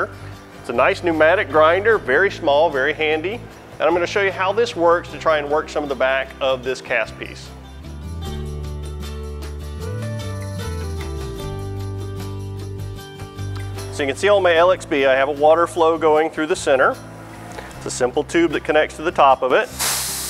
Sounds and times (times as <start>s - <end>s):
Speech: 0.0s - 7.6s, 13.9s - 17.0s, 17.8s - 19.7s
Music: 0.0s - 20.2s.